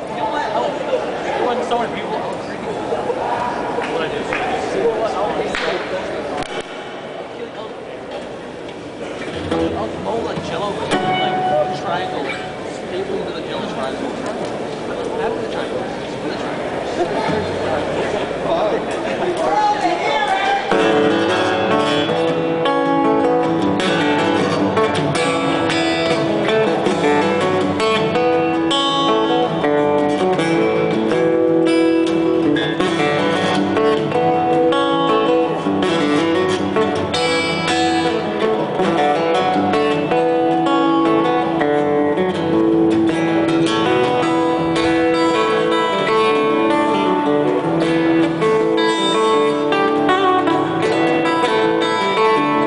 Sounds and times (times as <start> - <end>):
Acoustic guitar: 5.6 - 52.6
Strum: 9.0 - 13.0, 20.7 - 52.6
Bass guitar: 9.2 - 12.8, 20.7 - 52.6.